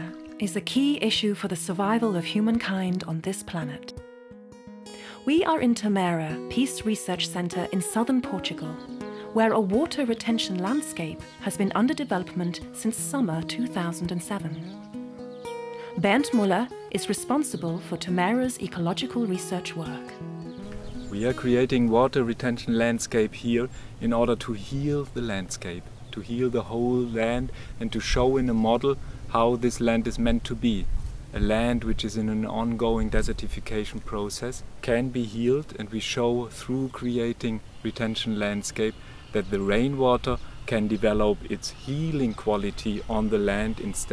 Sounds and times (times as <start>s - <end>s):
Speech: 0.0s - 3.9s, 5.3s - 8.8s, 9.4s - 14.7s, 16.0s - 20.1s, 21.1s - 44.1s
Music: 0.0s - 23.7s, 40.8s - 44.1s.